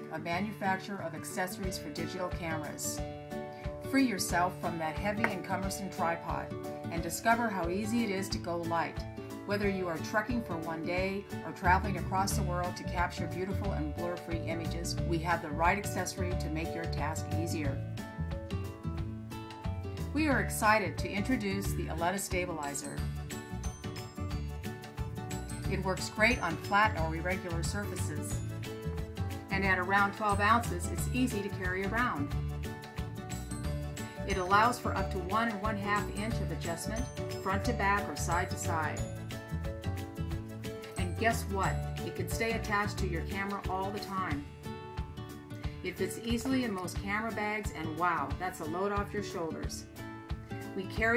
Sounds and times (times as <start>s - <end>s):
Music: 0.0s - 51.1s
Speech: 0.1s - 3.0s, 3.9s - 17.8s, 20.2s - 23.0s, 25.7s - 28.4s, 29.5s - 32.3s, 34.3s - 39.0s, 41.0s - 44.5s, 45.9s - 49.9s, 50.8s - 51.1s.